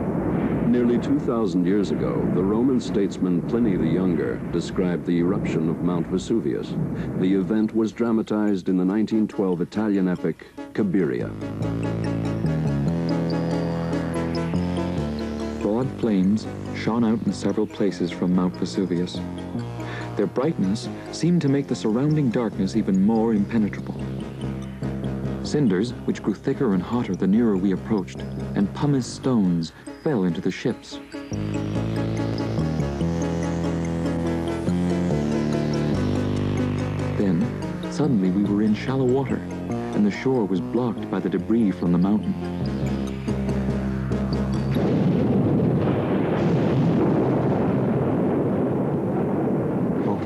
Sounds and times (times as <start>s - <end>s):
Music: 0.0s - 49.3s, 50.0s - 50.2s
Speech: 0.7s - 11.4s, 15.6s - 19.3s, 20.2s - 24.0s, 25.4s - 31.0s, 37.2s - 42.4s, 50.0s - 50.2s.